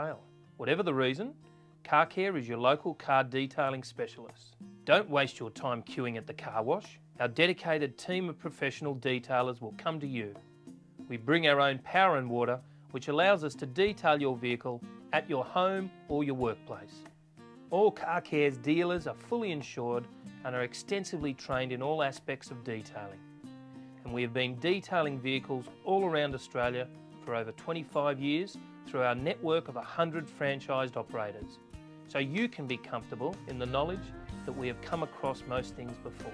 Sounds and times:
Speech: 0.0s - 10.4s, 11.1s - 17.0s, 17.7s - 23.2s, 24.0s - 36.3s
Music: 0.0s - 36.3s.

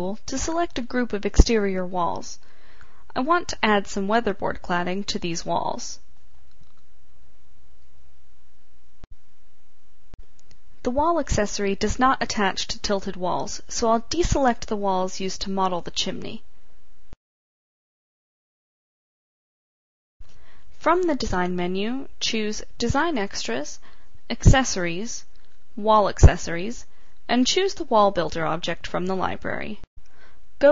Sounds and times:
Speech: 0.0s - 2.4s, 3.1s - 6.0s, 10.8s - 16.5s, 20.8s - 29.9s.

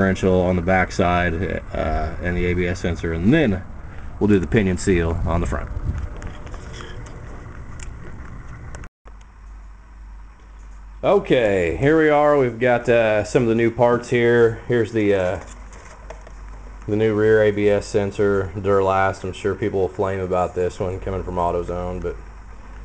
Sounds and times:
Speech: 0.0s - 5.7s, 11.0s - 15.5s, 16.9s - 22.2s.

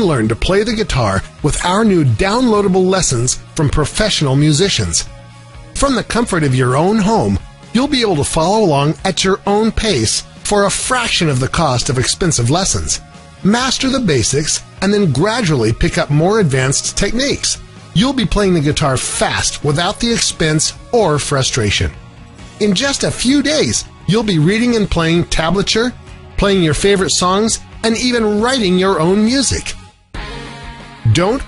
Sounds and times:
Speech: 0.0s - 5.1s, 5.8s - 22.0s, 22.6s - 29.8s, 31.1s - 31.4s
Guitar: 0.0s - 31.4s.

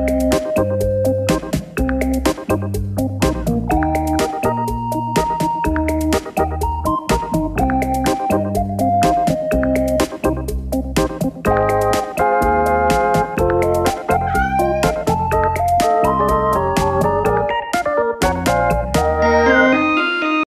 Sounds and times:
Music: 0.0s - 20.5s.

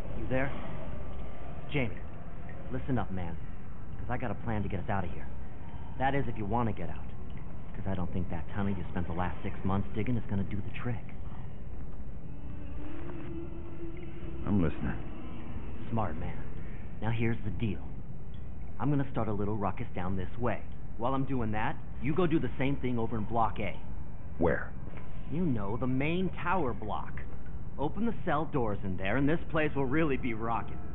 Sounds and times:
Speech: 0.2s - 0.7s, 1.7s - 2.0s, 2.6s - 3.4s, 4.0s - 5.3s, 5.9s - 7.1s, 7.8s - 11.2s, 14.4s - 15.1s, 15.8s - 18.0s, 18.8s - 30.9s.

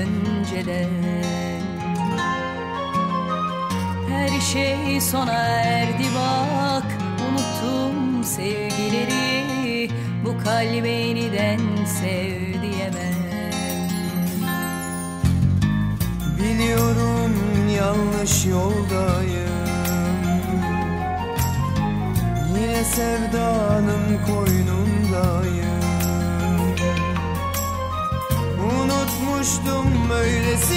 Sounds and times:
Music: 0.0s - 30.7s.

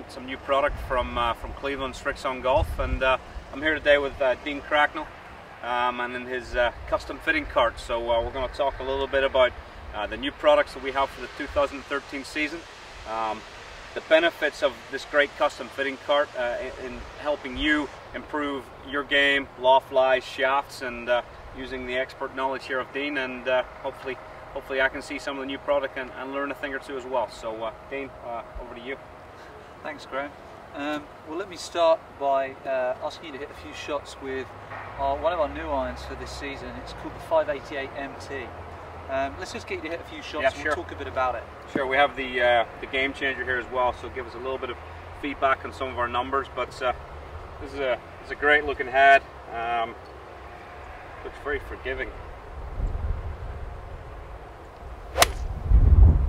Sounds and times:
Speech: 0.0s - 13.4s, 14.0s - 29.0s, 29.8s - 47.0s, 47.6s - 50.0s, 51.2s - 52.2s.

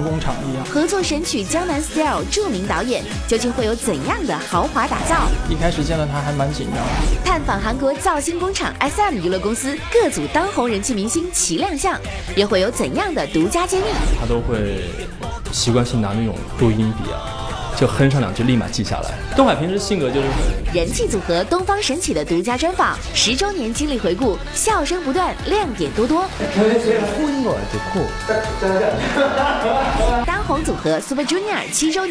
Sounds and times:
Speech: 0.0s - 17.2s, 17.8s - 29.1s, 30.0s - 32.1s
Music: 0.0s - 32.1s.

